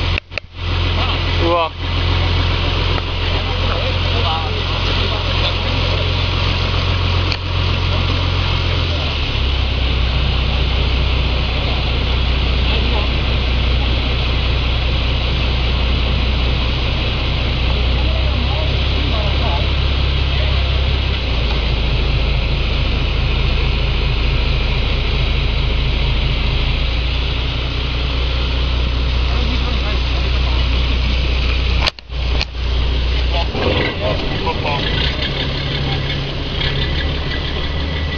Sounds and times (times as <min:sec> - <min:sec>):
Motorboat, speedboat: 0:00.0 - 0:38.1
Ship: 0:00.0 - 0:38.1
Speech: 0:01.0 - 0:01.8, 0:03.1 - 0:06.5, 0:11.6 - 0:14.0, 0:17.8 - 0:21.5, 0:29.2 - 0:31.5, 0:33.2 - 0:36.9.